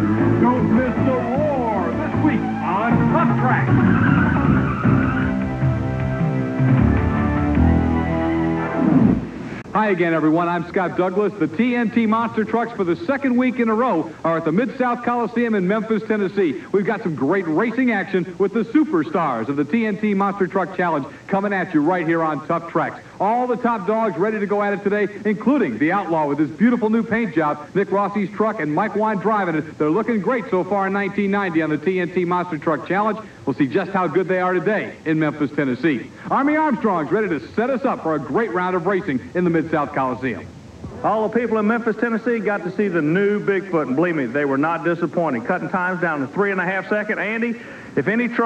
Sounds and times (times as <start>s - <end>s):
Speech: 0.4s - 3.7s, 9.7s - 48.4s.